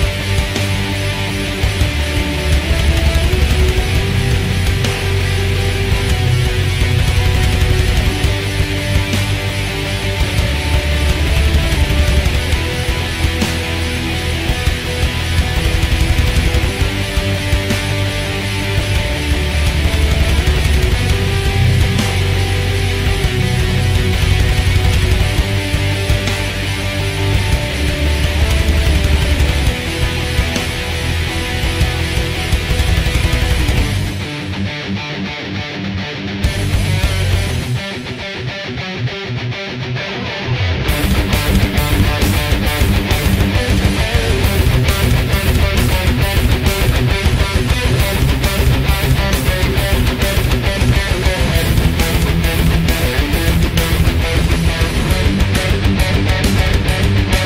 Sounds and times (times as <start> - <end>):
Guitar: 0.0 - 57.4.